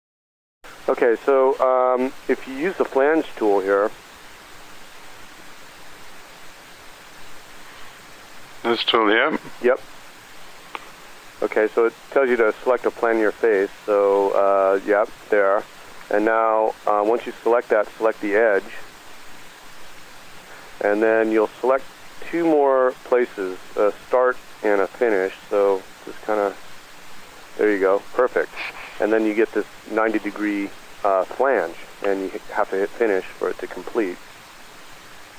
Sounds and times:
Pink noise: 0.7s - 35.3s
Speech: 0.9s - 4.0s, 8.7s - 9.8s, 11.4s - 18.9s, 20.8s - 26.6s, 27.6s - 34.2s.

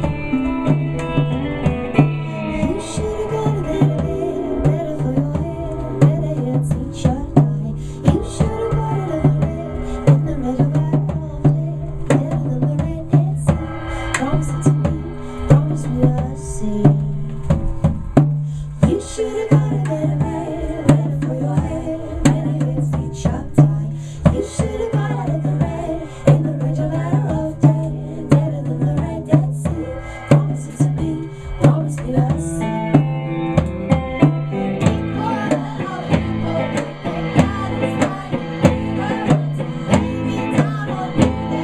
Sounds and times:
Music: 0.0s - 41.6s.

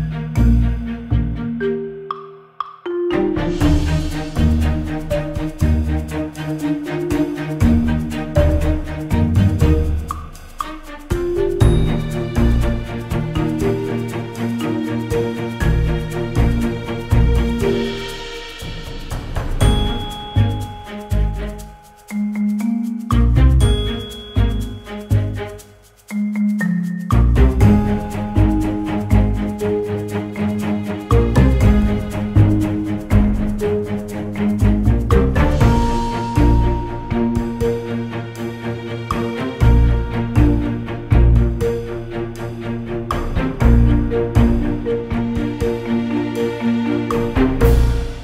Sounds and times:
Music: 0.0s - 48.2s.

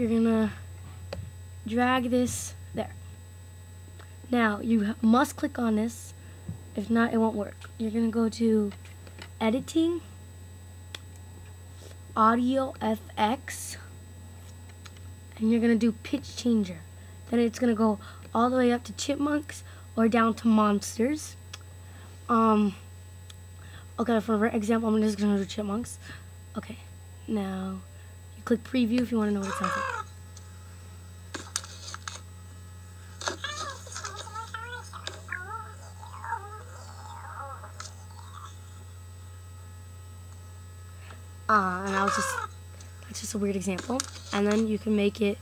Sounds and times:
Speech: 0.0s - 0.7s, 1.6s - 3.0s, 4.3s - 8.8s, 9.4s - 10.1s, 12.2s - 13.9s, 15.4s - 21.4s, 22.3s - 22.9s, 24.0s - 30.0s, 41.5s - 45.4s.

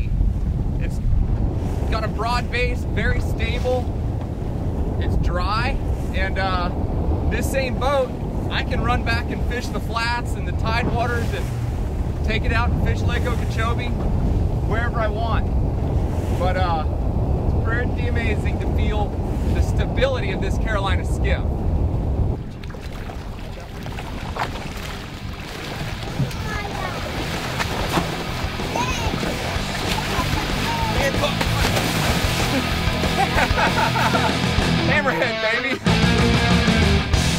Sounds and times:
Boat, Water vehicle: 0.0s - 36.0s
Outside, rural or natural: 0.0s - 37.3s
Speech: 1.9s - 3.9s, 5.0s - 6.7s, 7.3s - 11.5s, 12.3s - 14.0s, 14.7s - 15.4s, 16.4s - 16.9s, 17.6s - 21.5s, 30.0s - 31.6s, 34.9s - 35.9s
Slosh: 22.5s - 32.9s.

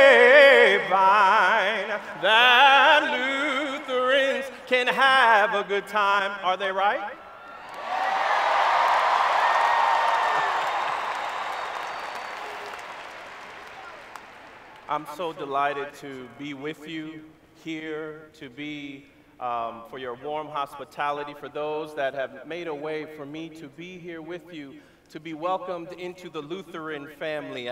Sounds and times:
Male speech, man speaking: 5.6s - 7.2s, 14.9s - 27.7s
Narration, monologue: 14.9s - 27.7s.

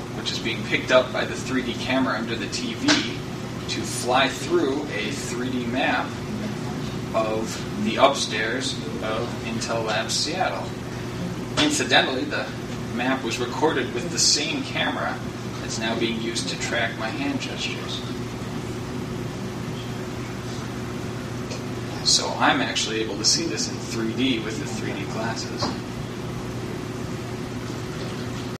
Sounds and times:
Speech: 0.2s - 10.8s, 11.6s - 18.2s, 22.0s - 25.8s.

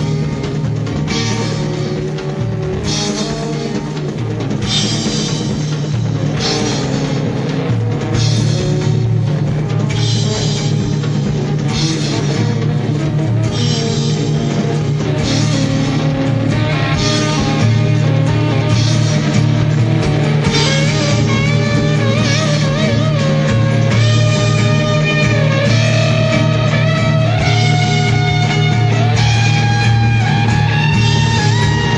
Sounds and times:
Psychedelic rock: 0.0s - 31.9s.

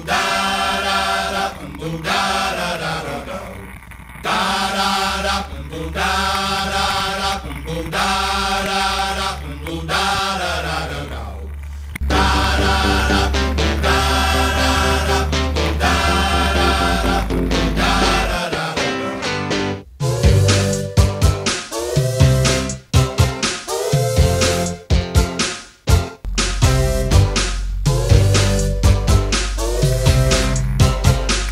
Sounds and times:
Soul music: 12.0s - 31.5s.

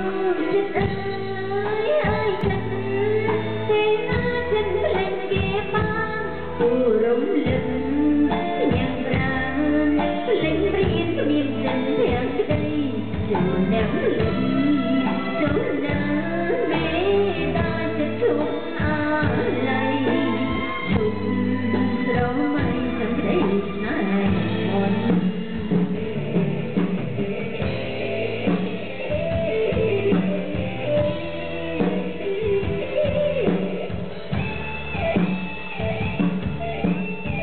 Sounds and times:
Music: 0.0s - 37.4s.

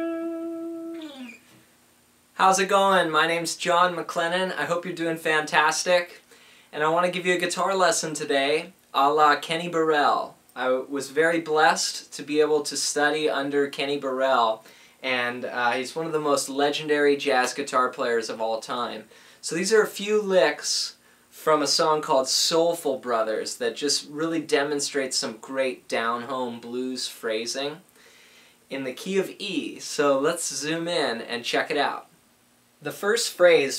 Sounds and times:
Speech: 2.4s - 27.9s, 28.7s - 32.1s, 32.8s - 33.7s.

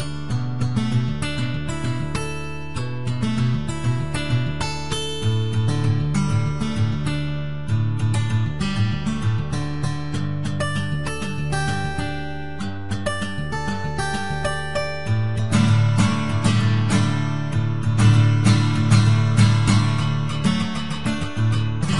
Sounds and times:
Acoustic guitar: 0.0s - 22.0s
Strum: 0.0s - 22.0s.

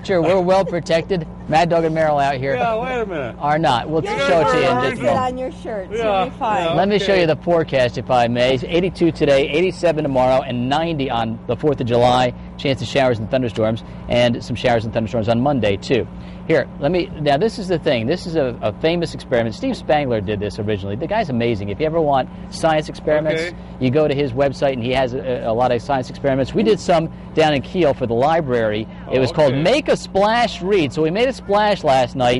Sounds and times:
Speech: 0.0s - 32.3s.

